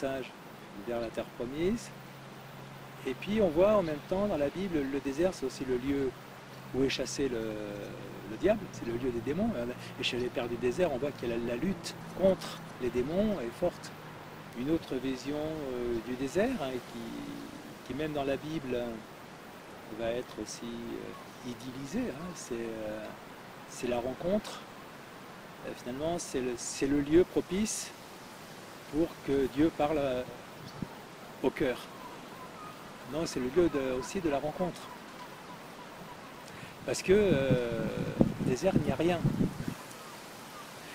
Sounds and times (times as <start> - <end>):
Speech: 0.0 - 1.9, 3.0 - 13.9, 14.6 - 19.0, 19.9 - 24.6, 25.6 - 28.0, 28.9 - 30.4, 31.4 - 31.9, 33.1 - 34.9, 36.8 - 39.3.